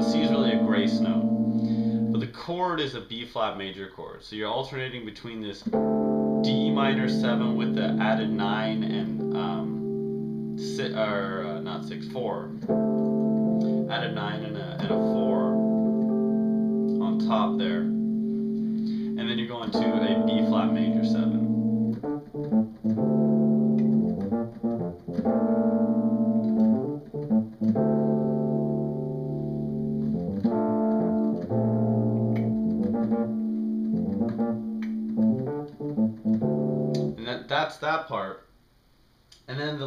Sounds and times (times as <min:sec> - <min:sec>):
Speech: 0:00.0 - 0:01.3, 0:02.2 - 0:05.7, 0:06.5 - 0:09.8, 0:10.6 - 0:12.6, 0:13.9 - 0:15.6, 0:16.9 - 0:18.0, 0:19.2 - 0:21.5, 0:37.2 - 0:38.5, 0:39.5 - 0:39.8
Piano: 0:00.0 - 0:02.3, 0:05.6 - 0:37.2
Inside, small room: 0:00.0 - 0:39.8.